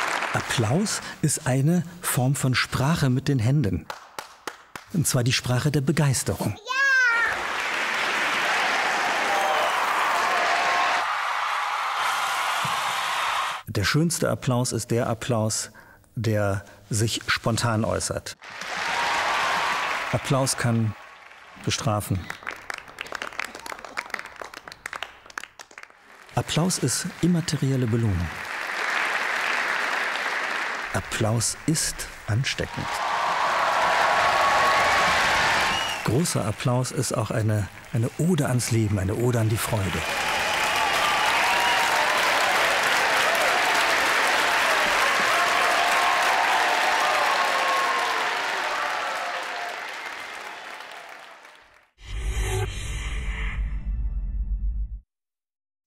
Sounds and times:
Applause: 0.0 - 1.2, 3.8 - 5.2, 6.7 - 13.7, 18.4 - 52.0.

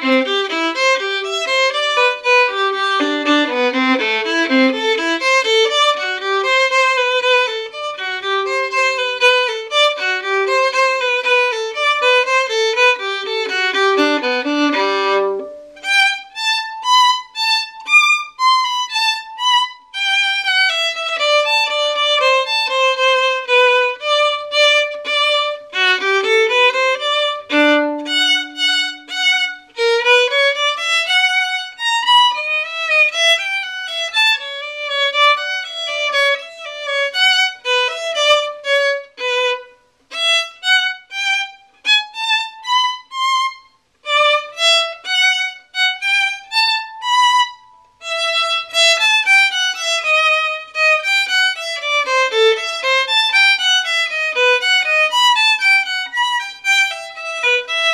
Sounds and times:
Violin, fiddle: 0.0 - 57.9.

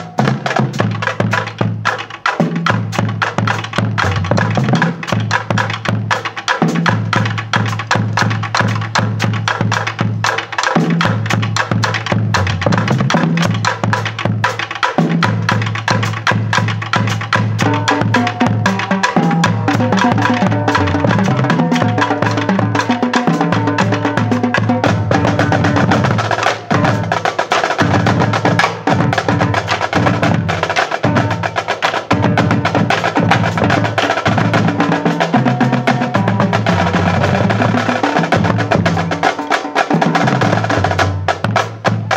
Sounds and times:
Snare drum: 0.0 - 42.1
Bass drum: 2.5 - 6.1, 6.7 - 39.3, 40.0 - 42.1.

